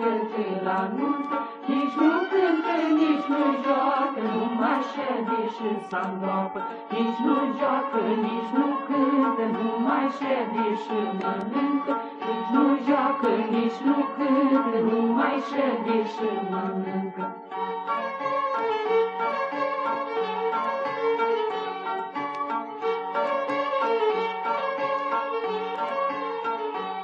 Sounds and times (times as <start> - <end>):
Clarinet: 0.0 - 27.0
Folk music: 0.0 - 27.0.